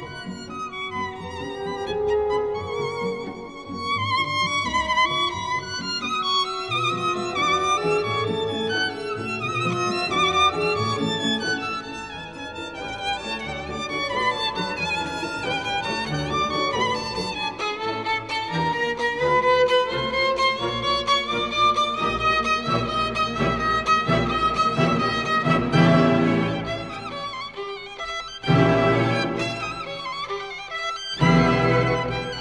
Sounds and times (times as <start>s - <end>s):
Violin, fiddle: 0.0s - 32.4s.